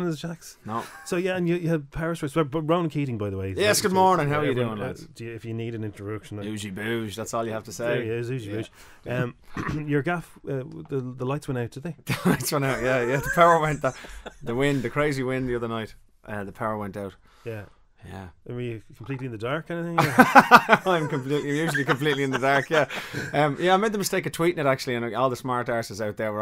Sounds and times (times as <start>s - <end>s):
Speech: 0.0s - 26.4s.